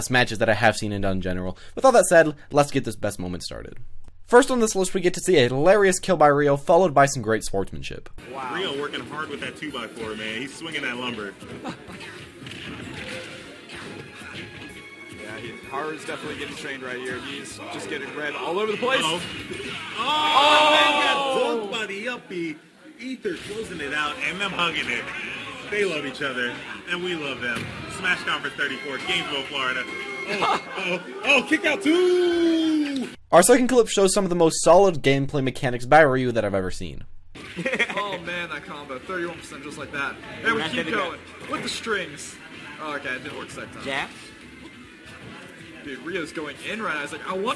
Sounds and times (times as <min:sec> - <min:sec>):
Music: 0:08.2 - 0:22.4, 0:23.0 - 0:33.2, 0:37.4 - 0:47.5.